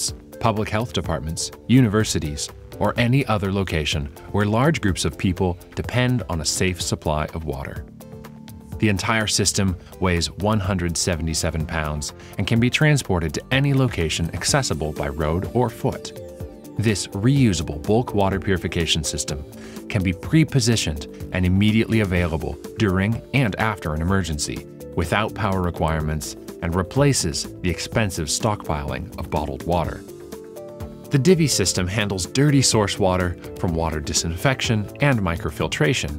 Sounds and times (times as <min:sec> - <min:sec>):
Speech: 0:00.0 - 0:07.8, 0:08.8 - 0:16.2, 0:16.8 - 0:30.1, 0:31.1 - 0:36.1
Music: 0:00.0 - 0:36.1.